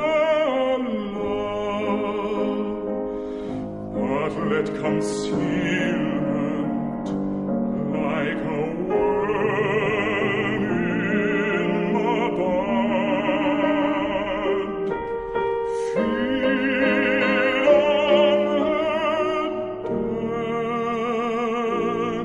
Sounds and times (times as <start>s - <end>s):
Opera: 0.0s - 22.2s.